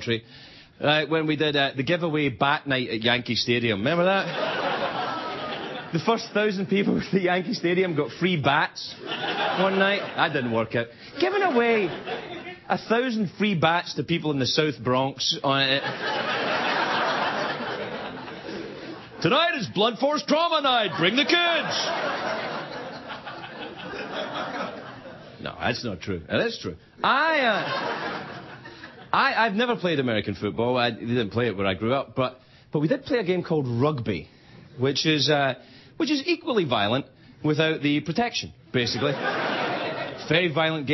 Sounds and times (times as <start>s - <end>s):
Narration, monologue: 0.0s - 40.9s.